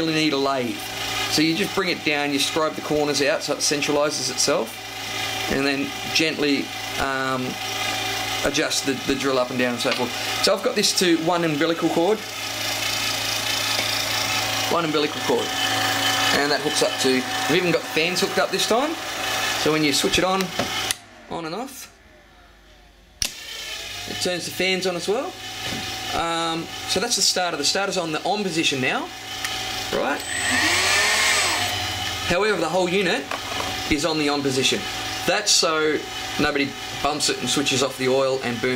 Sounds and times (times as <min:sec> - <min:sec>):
Speech: 0:00.0 - 0:04.8, 0:05.5 - 0:07.6, 0:08.4 - 0:12.2, 0:14.7 - 0:15.5, 0:16.3 - 0:19.0, 0:19.6 - 0:20.6, 0:21.3 - 0:22.0, 0:24.1 - 0:25.4, 0:26.1 - 0:29.1, 0:29.9 - 0:30.2, 0:32.3 - 0:33.3, 0:33.9 - 0:38.7
Engine: 0:00.0 - 0:38.7.